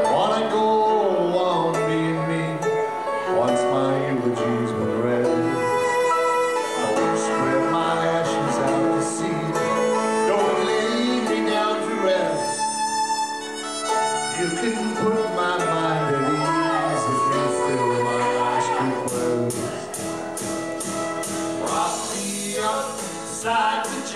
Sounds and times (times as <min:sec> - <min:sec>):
Male singing: 0:00.0 - 0:05.7, 0:06.8 - 0:12.6, 0:14.4 - 0:19.8, 0:21.6 - 0:24.1
Music: 0:00.0 - 0:24.1.